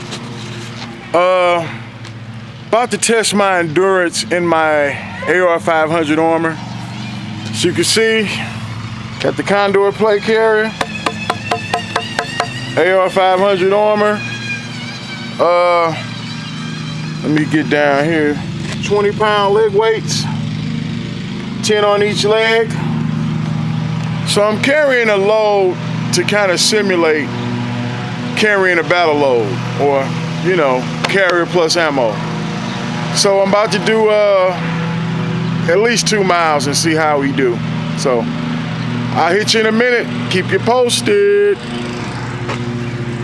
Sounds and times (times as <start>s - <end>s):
Speech: 1.2s - 1.7s, 2.7s - 6.6s, 7.6s - 8.5s, 9.2s - 10.8s, 12.8s - 14.2s, 15.4s - 16.0s, 17.2s - 20.4s, 21.6s - 22.8s, 24.3s - 27.3s, 28.4s - 32.2s, 33.2s - 34.6s, 35.6s - 38.3s, 39.2s - 41.6s.